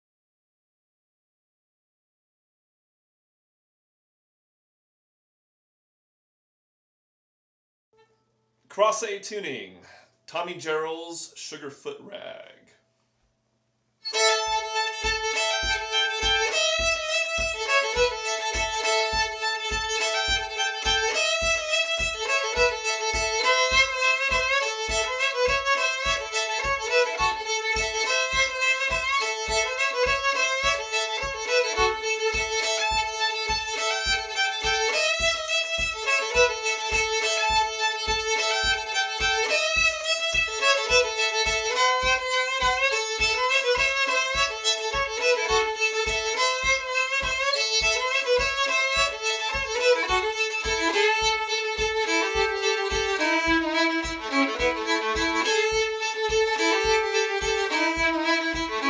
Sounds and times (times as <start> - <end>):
Violin, fiddle: 14.0 - 58.8.